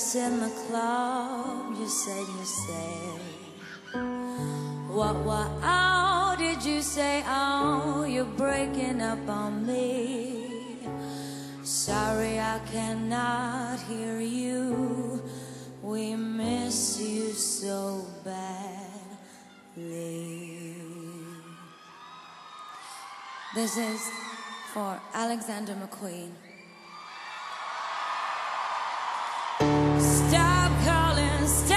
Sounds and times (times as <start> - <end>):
Music: 0.0 - 20.2, 29.6 - 31.7.